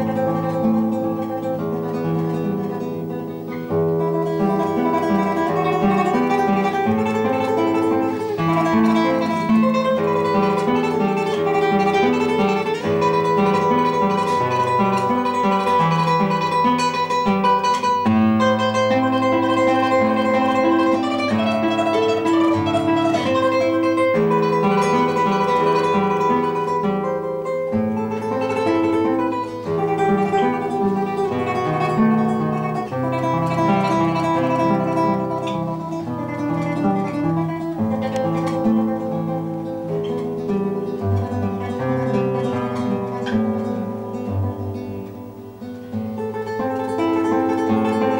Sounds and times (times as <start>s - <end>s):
Pizzicato: 0.0s - 27.0s, 27.9s - 48.1s.